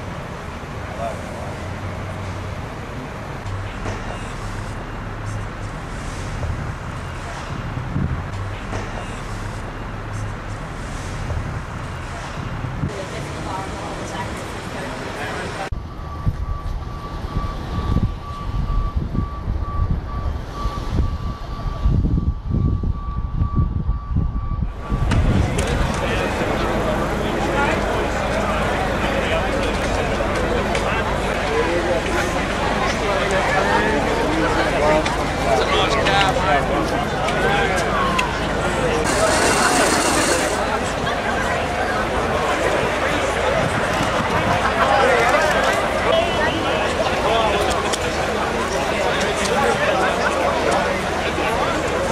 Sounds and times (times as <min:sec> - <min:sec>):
Speech: 0:00.9 - 0:01.6, 0:12.1 - 0:15.8, 0:24.9 - 0:52.1.